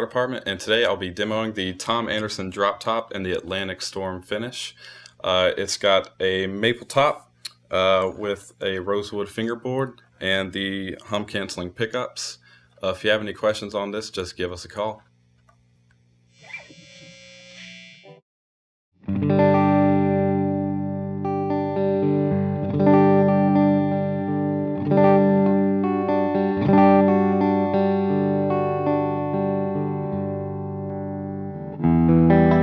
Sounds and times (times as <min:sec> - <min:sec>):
Electric guitar: 0:19.0 - 0:32.6.